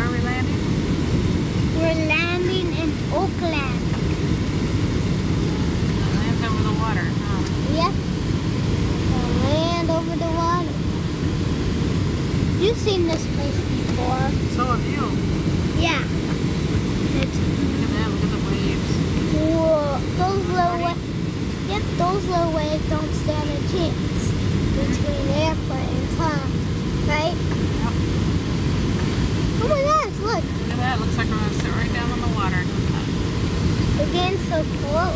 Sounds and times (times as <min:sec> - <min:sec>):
Speech: 0:00.0 - 0:00.5, 0:01.8 - 0:03.9, 0:06.0 - 0:08.0, 0:09.1 - 0:10.8, 0:12.6 - 0:15.2, 0:17.1 - 0:21.0, 0:21.7 - 0:26.5, 0:29.6 - 0:33.2, 0:34.0 - 0:35.1.